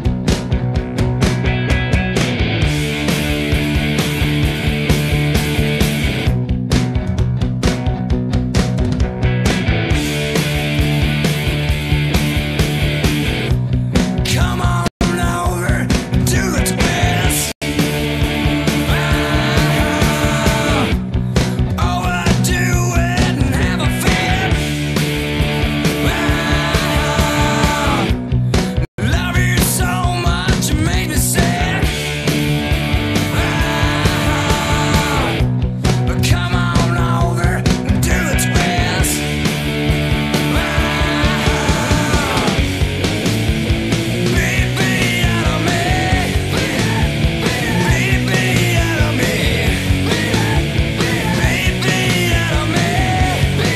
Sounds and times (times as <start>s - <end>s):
Grunge: 0.0s - 53.7s.